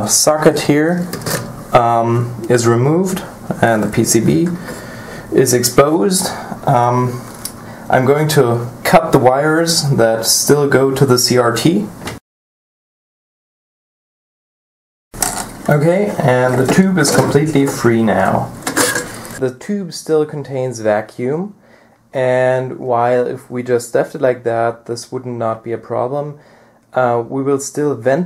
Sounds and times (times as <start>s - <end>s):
Speech: 0.0s - 4.6s, 5.3s - 7.3s, 7.9s - 12.0s, 15.7s - 18.6s, 19.4s - 28.2s.